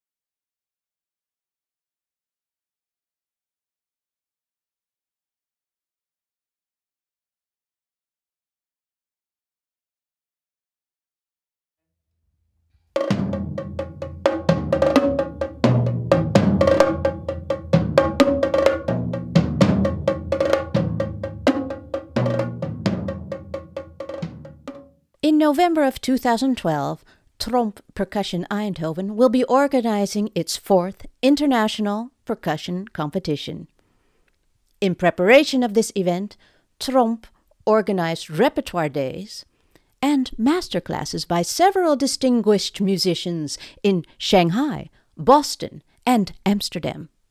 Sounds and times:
Speech: 25.2s - 33.7s, 34.8s - 47.2s.

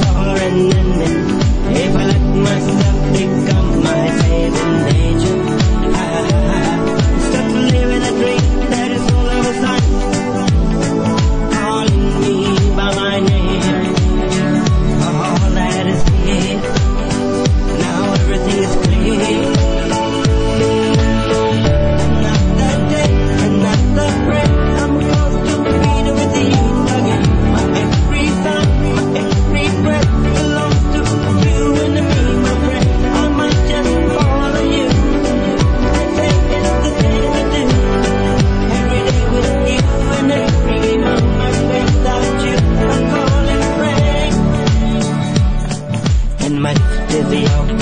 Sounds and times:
Music: 0.0s - 47.8s.

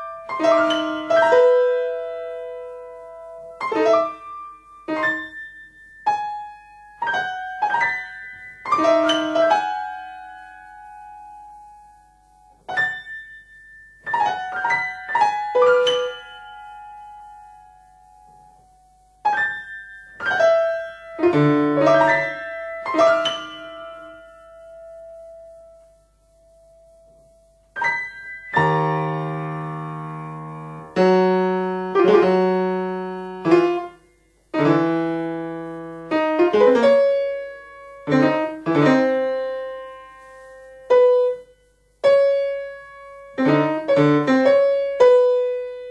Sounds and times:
Music: 0.0s - 45.9s.

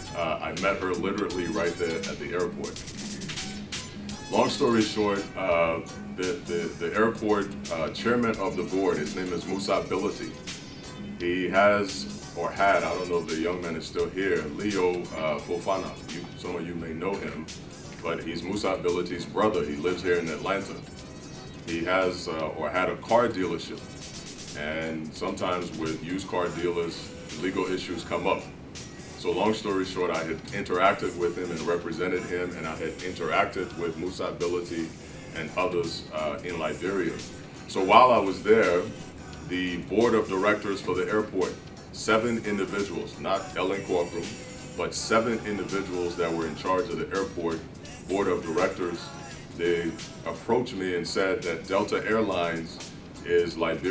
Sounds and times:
Music: 0.0s - 53.9s
Speech: 0.1s - 2.8s, 4.3s - 10.4s, 11.2s - 20.8s, 21.7s - 23.8s, 24.6s - 28.5s, 29.2s - 53.9s.

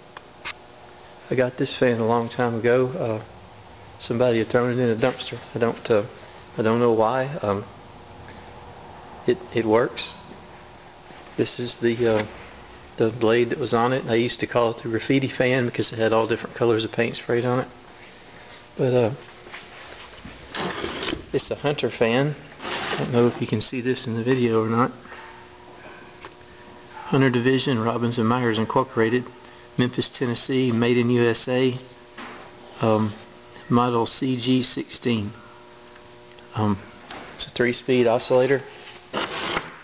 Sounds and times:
Mechanical fan: 0.0s - 39.8s
Speech: 1.3s - 3.3s, 4.0s - 7.7s, 9.3s - 10.3s, 11.4s - 12.3s, 13.0s - 17.8s, 18.8s - 19.3s, 21.3s - 22.4s, 23.0s - 25.0s, 27.0s - 31.9s, 32.8s - 35.4s, 36.5s - 38.7s.

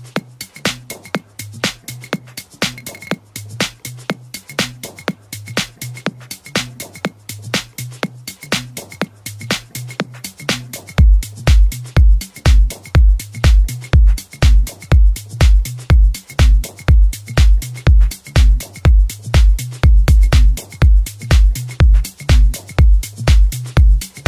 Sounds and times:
Music: 0.0s - 24.2s.

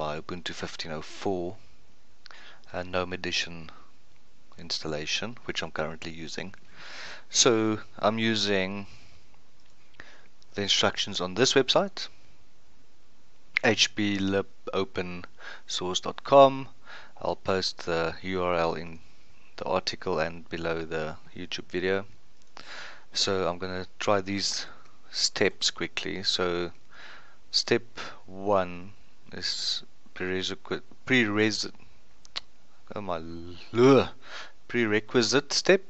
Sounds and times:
Speech: 0.0s - 1.6s, 2.7s - 3.8s, 4.6s - 6.6s, 7.3s - 8.9s, 10.6s - 12.2s, 13.6s - 19.0s, 19.6s - 22.1s, 23.1s - 26.8s, 27.5s - 31.8s, 32.9s - 35.9s.

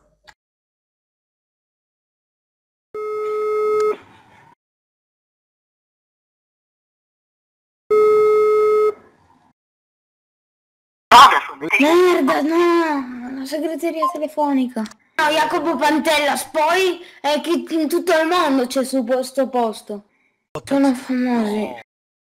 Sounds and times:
Speech: 11.1s - 20.0s, 20.6s - 21.9s.

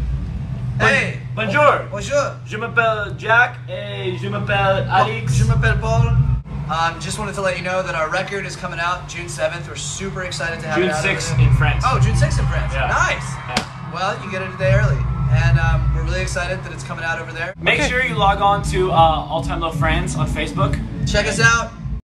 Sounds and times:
Speech: 0.8s - 21.8s
Music: 0.9s - 22.0s.

